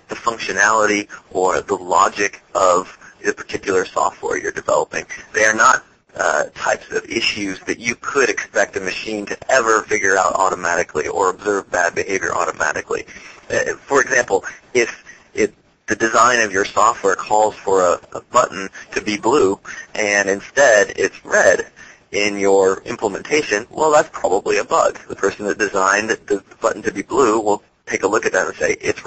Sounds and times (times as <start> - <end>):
Speech: 0.0 - 29.0.